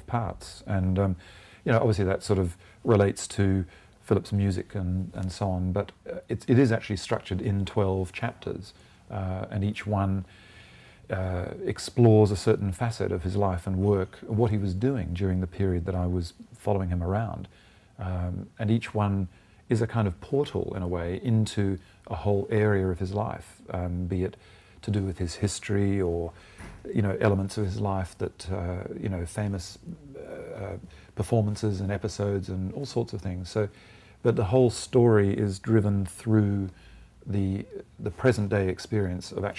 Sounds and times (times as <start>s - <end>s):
Speech: 0.0s - 10.3s, 11.1s - 39.5s.